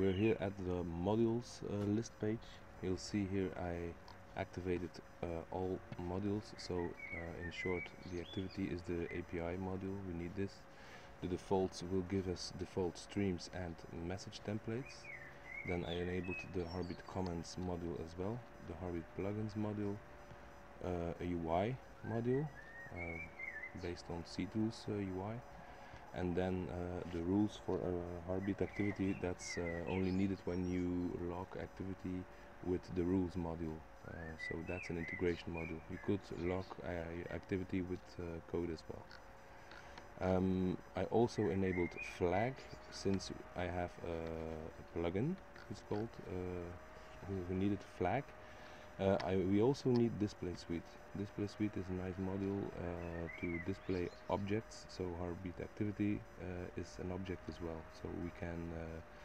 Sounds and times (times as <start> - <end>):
Speech: 0.0 - 20.0, 20.8 - 39.2, 40.1 - 48.3, 48.9 - 59.1.